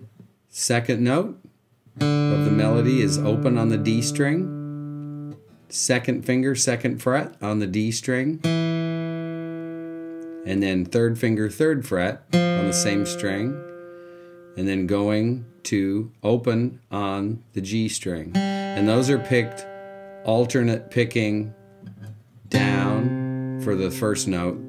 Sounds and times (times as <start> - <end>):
Speech: 0.5 - 1.5, 2.3 - 4.5, 5.7 - 8.5, 10.4 - 13.6, 14.6 - 19.7, 20.3 - 21.6, 22.5 - 24.6
Acoustic guitar: 1.9 - 7.6, 8.4 - 15.6, 18.2 - 24.6.